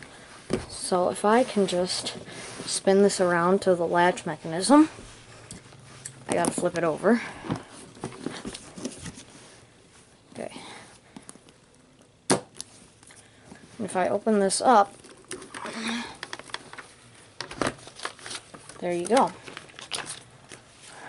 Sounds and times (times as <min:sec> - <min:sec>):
Speech: 0:13.8 - 0:14.9, 0:18.8 - 0:19.4.